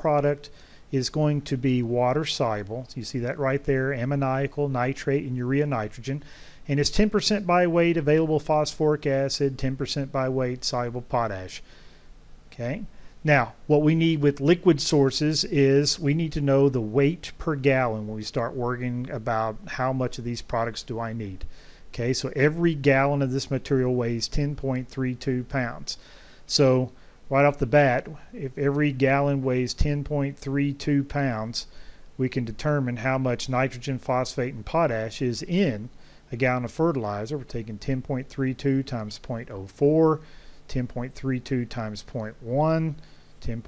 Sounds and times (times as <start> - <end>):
Speech: 0.0 - 11.6, 12.5 - 43.6.